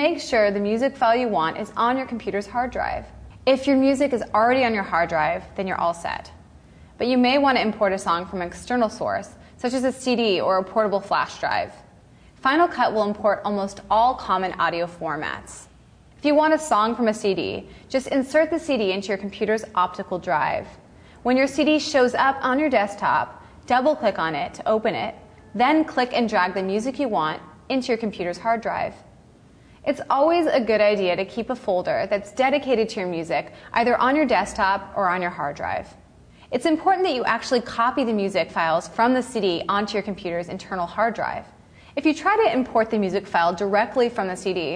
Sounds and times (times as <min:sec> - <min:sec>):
Speech: 0:00.0 - 0:06.4, 0:07.0 - 0:11.8, 0:12.4 - 0:29.1, 0:29.8 - 0:44.7.